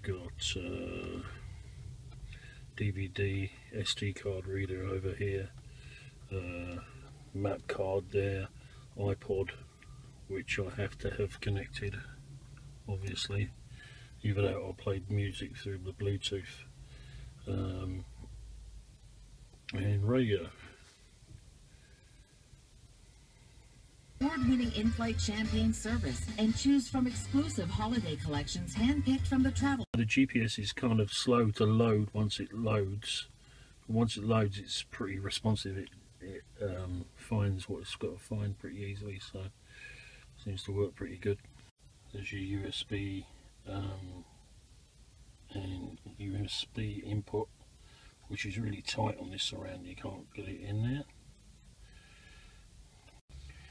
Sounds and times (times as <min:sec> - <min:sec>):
Speech: 0:00.0 - 0:01.4, 0:02.8 - 0:05.5, 0:06.3 - 0:09.6, 0:10.3 - 0:12.2, 0:12.9 - 0:13.5, 0:14.2 - 0:16.7, 0:17.4 - 0:18.1, 0:19.7 - 0:20.7, 0:24.2 - 0:33.3, 0:33.9 - 0:39.5, 0:40.4 - 0:41.4, 0:42.1 - 0:44.3, 0:45.5 - 0:47.5, 0:48.3 - 0:51.1.